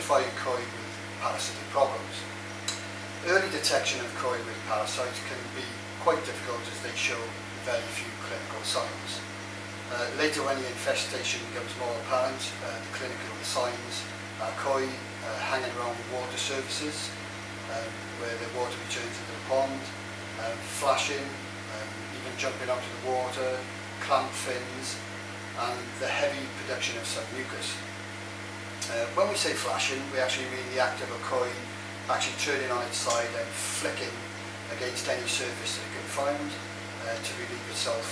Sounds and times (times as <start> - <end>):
Speech: 0.0 - 2.3, 3.2 - 9.3, 9.9 - 25.0, 25.6 - 27.9, 28.8 - 38.1.